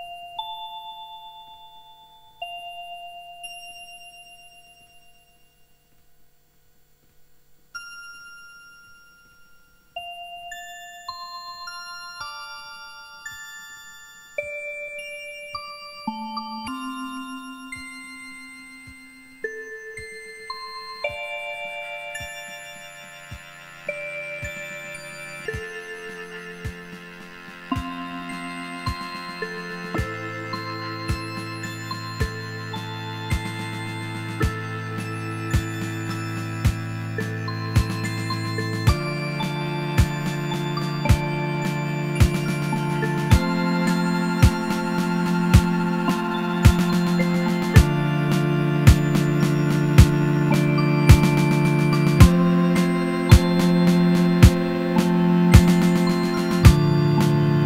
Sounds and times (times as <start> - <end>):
Music: 0.0 - 6.1, 7.6 - 57.6.